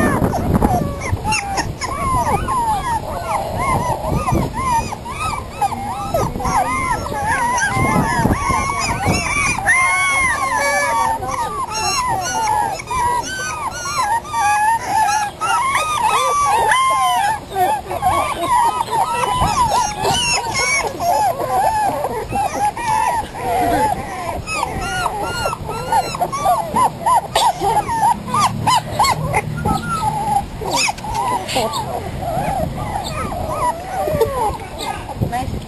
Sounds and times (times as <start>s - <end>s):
Animal: 0.0s - 35.5s
Outside, rural or natural: 0.0s - 35.6s.